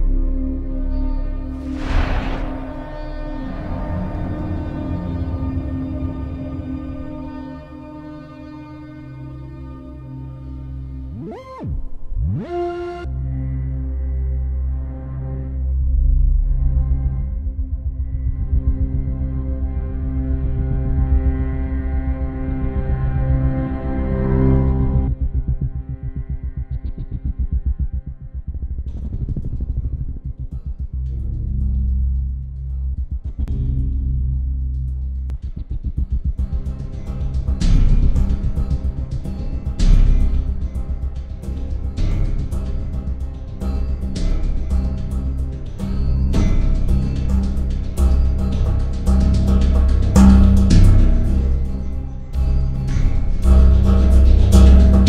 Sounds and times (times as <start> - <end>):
Music: 0.0 - 55.0.